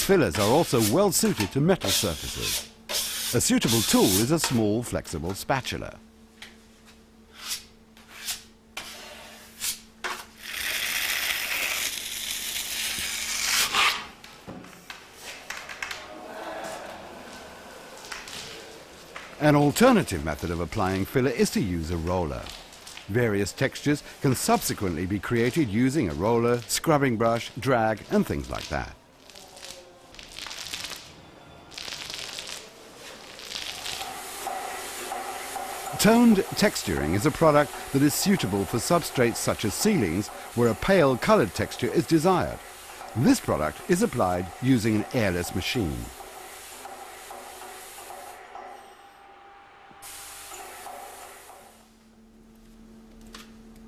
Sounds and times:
Speech: 0:00.0 - 0:02.6, 0:03.3 - 0:06.0, 0:19.4 - 0:29.0, 0:36.0 - 0:42.6, 0:43.2 - 0:46.2.

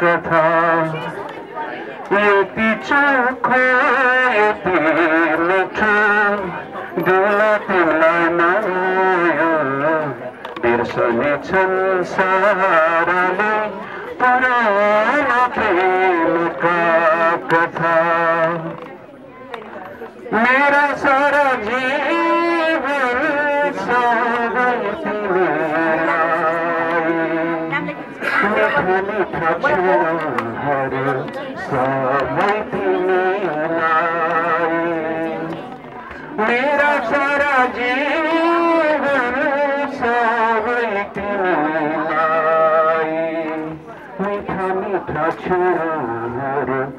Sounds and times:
Male singing: 0:00.0 - 0:01.3, 0:02.1 - 0:18.9, 0:20.2 - 0:46.9
Speech: 0:00.0 - 0:46.9.

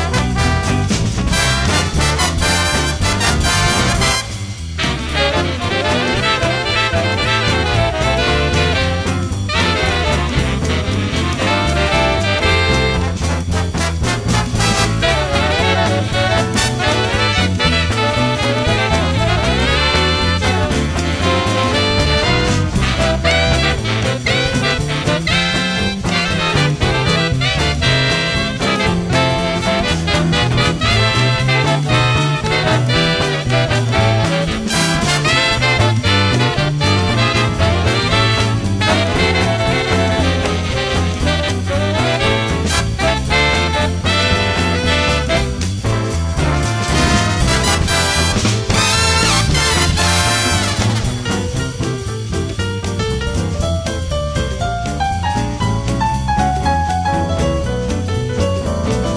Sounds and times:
Swing music: 0:00.0 - 0:59.1.

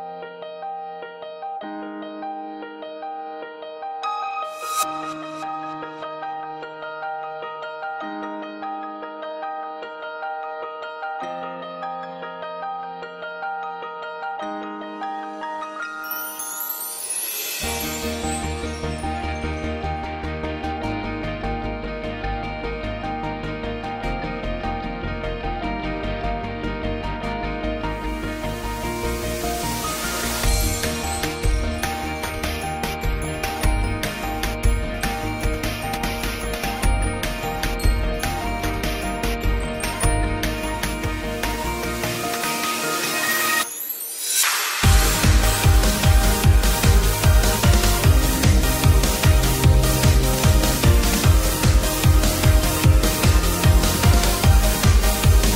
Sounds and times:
Music: 0:00.0 - 0:55.5.

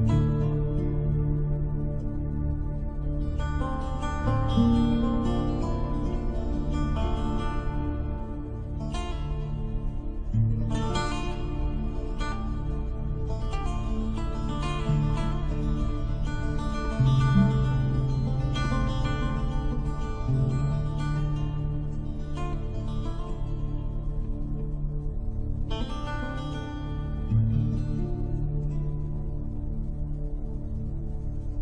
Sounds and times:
Music: 0:00.0 - 0:31.6.

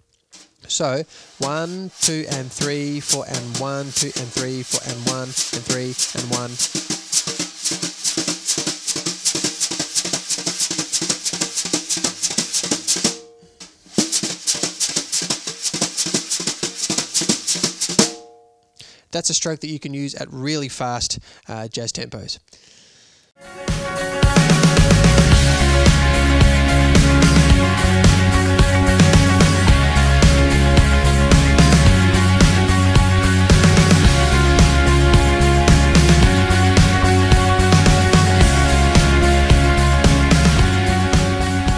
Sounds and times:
Drum kit: 0:00.0 - 0:18.4, 0:23.4 - 0:41.7
Speech: 0:00.6 - 0:06.6, 0:19.1 - 0:22.5
Drum: 0:01.3 - 0:18.4, 0:23.6 - 0:41.7.

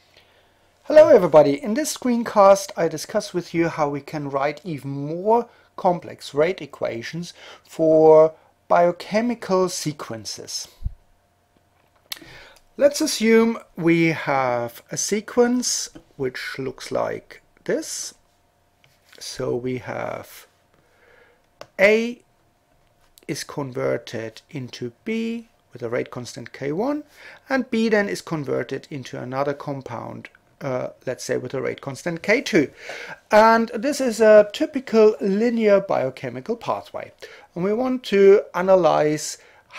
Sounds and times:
Speech: 0:00.9 - 0:10.8, 0:12.8 - 0:18.2, 0:19.2 - 0:20.5, 0:21.7 - 0:22.2, 0:23.2 - 0:39.7.

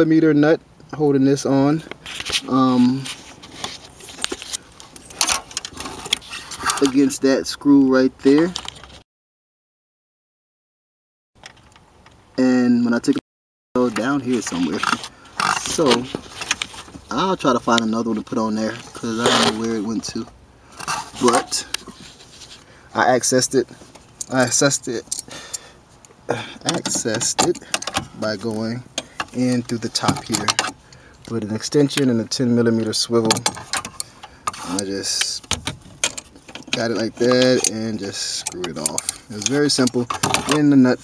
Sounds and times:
Speech: 0:00.0 - 0:01.9, 0:02.5 - 0:03.1, 0:06.8 - 0:08.6, 0:12.4 - 0:13.2, 0:13.8 - 0:16.2, 0:17.1 - 0:20.3, 0:21.2 - 0:21.8, 0:23.0 - 0:25.0, 0:26.3 - 0:27.6, 0:28.2 - 0:28.8, 0:29.4 - 0:30.7, 0:31.3 - 0:33.5, 0:34.6 - 0:35.5, 0:36.7 - 0:41.0.

